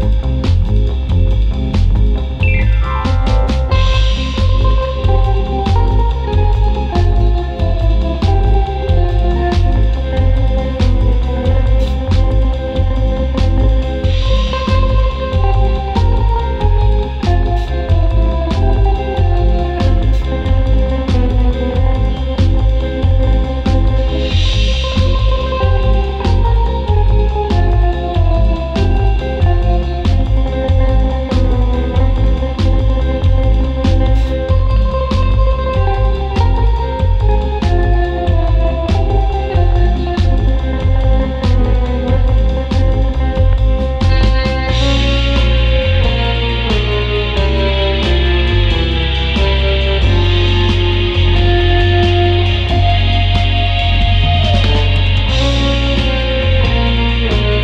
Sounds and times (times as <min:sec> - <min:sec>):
Music: 0:00.0 - 0:57.6.